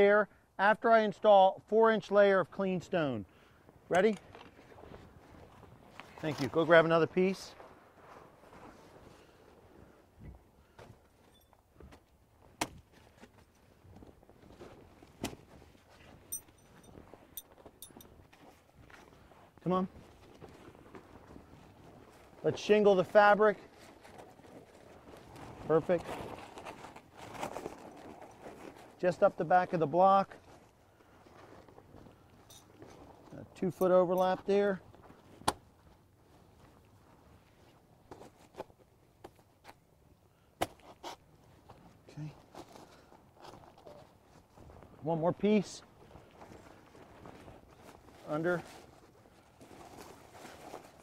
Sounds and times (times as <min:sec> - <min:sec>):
Speech: 0:00.0 - 0:03.2, 0:03.9 - 0:04.2, 0:06.2 - 0:07.6, 0:19.6 - 0:19.9, 0:22.4 - 0:23.7, 0:25.6 - 0:26.1, 0:29.0 - 0:30.4, 0:33.3 - 0:34.8, 0:42.1 - 0:42.4, 0:45.0 - 0:45.8, 0:48.2 - 0:48.7.